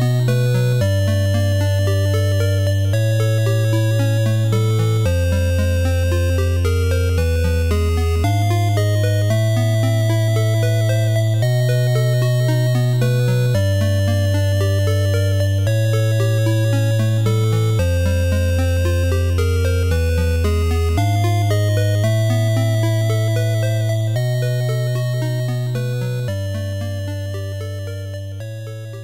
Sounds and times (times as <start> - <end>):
Music: 0.0 - 29.0.